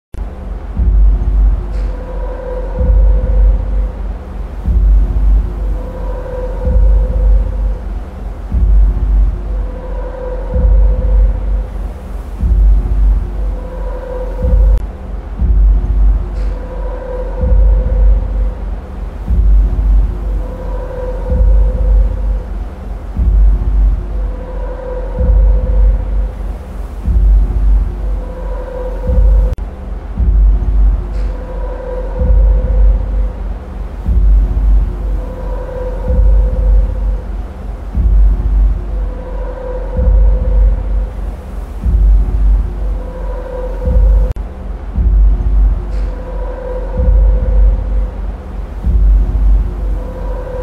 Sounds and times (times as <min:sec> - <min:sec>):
Music: 0:00.1 - 0:50.6.